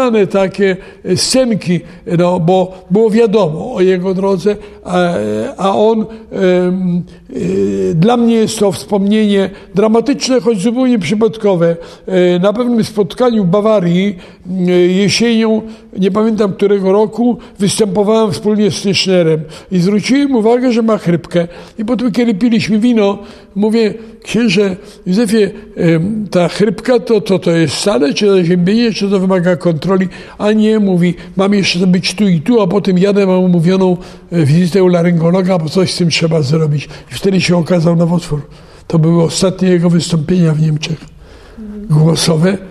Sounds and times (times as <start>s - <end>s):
Speech: 0.0s - 42.7s.